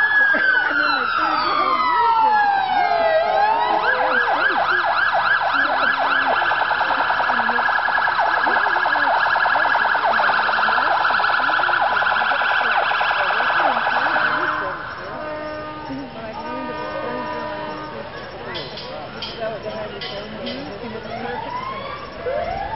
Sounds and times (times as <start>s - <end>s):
Speech: 0.0s - 22.4s.